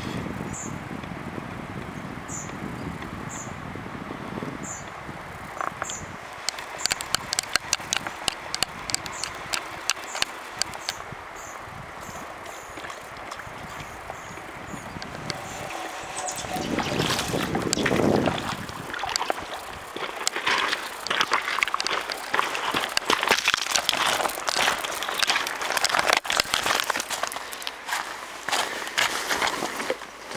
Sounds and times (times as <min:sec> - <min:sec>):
Stream: 0:00.0 - 0:30.3.